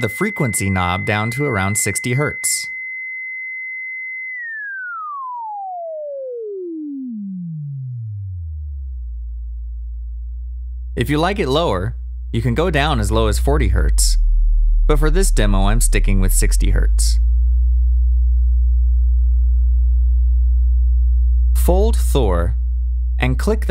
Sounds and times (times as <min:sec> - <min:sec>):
Speech: 0:00.0 - 0:02.7, 0:11.0 - 0:14.2, 0:14.9 - 0:17.2, 0:21.6 - 0:22.6, 0:23.2 - 0:23.7.